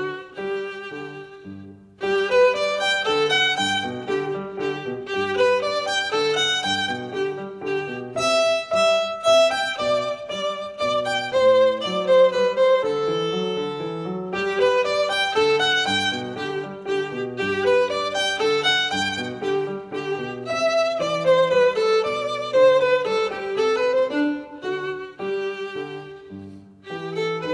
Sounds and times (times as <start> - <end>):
Violin, fiddle: 0.0 - 27.5.